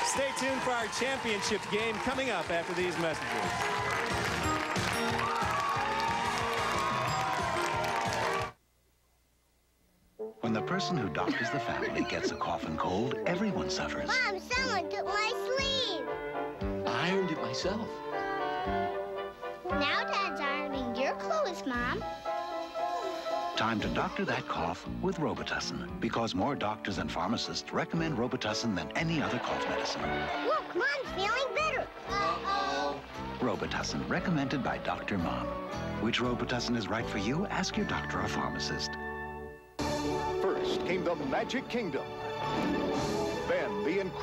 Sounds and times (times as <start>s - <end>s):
Music: 0.0s - 8.6s, 10.2s - 44.2s.